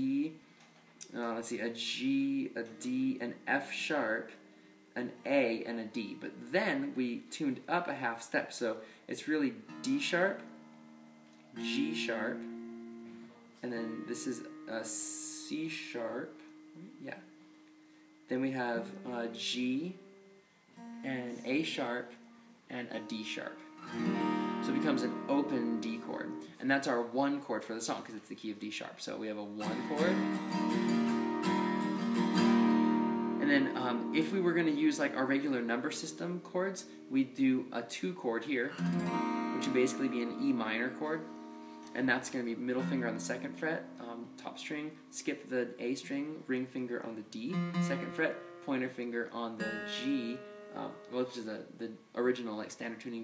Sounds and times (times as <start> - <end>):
Speech: 0.0 - 0.4, 1.0 - 4.4, 5.0 - 10.5, 11.6 - 12.5, 13.6 - 17.3, 18.3 - 20.0, 21.0 - 23.6, 24.6 - 30.3, 33.4 - 38.8, 39.6 - 41.3, 41.9 - 53.2
Acoustic guitar: 0.0 - 27.0, 29.6 - 51.7
Strum: 9.5 - 26.6, 29.6 - 51.7.